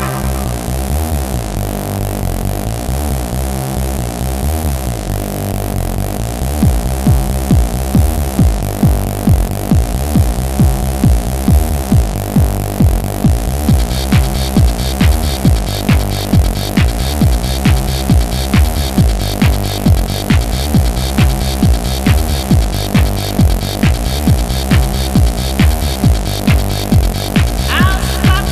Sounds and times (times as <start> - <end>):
Techno: 0.0 - 28.5.